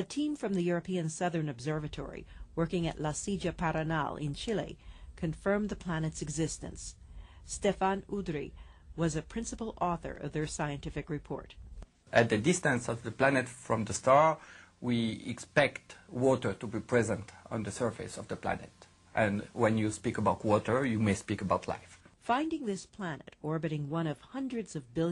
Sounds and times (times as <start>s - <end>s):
Speech: 7.5s - 25.1s.